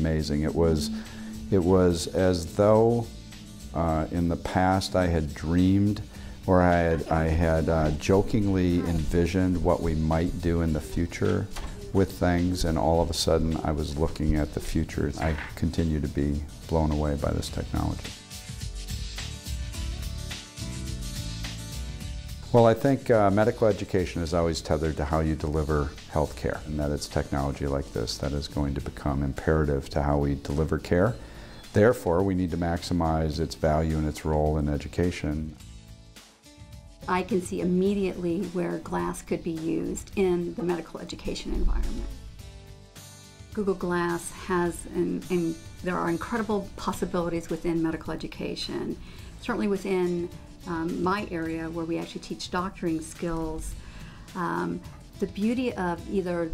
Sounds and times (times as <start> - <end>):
Speech: 0.0 - 3.1, 3.8 - 18.1, 22.5 - 31.2, 31.8 - 35.6, 37.1 - 42.0, 43.6 - 53.7, 54.4 - 56.5
Music: 0.0 - 56.5.